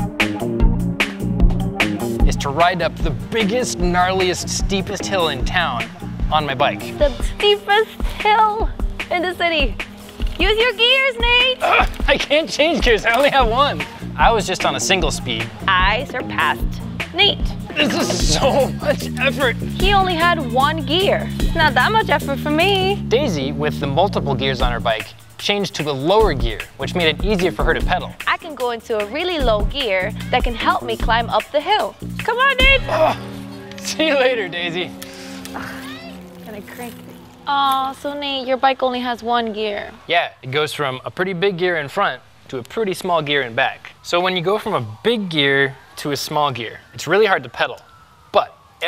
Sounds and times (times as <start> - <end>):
Music: 0.0 - 39.6.